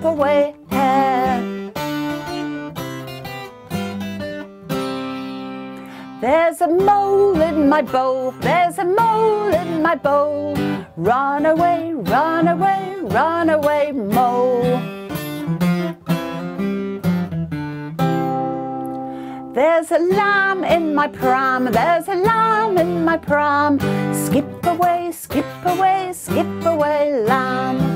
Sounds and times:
Music: 0:00.0 - 0:27.9.

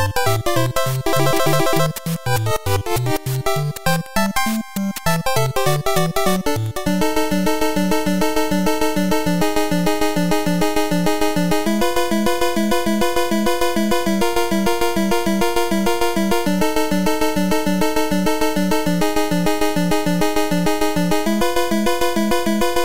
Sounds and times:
Music: 0:00.0 - 0:22.8.

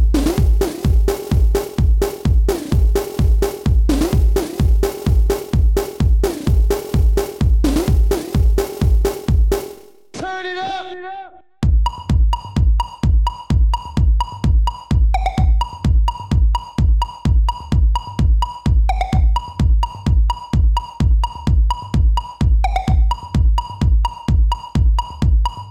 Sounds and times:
Electronica: 0:00.0 - 0:10.2, 0:11.6 - 0:25.7
Techno: 0:00.0 - 0:11.0, 0:11.6 - 0:25.7
Dance music: 0:00.0 - 0:25.7
Electronic dance music: 0:00.0 - 0:25.7.

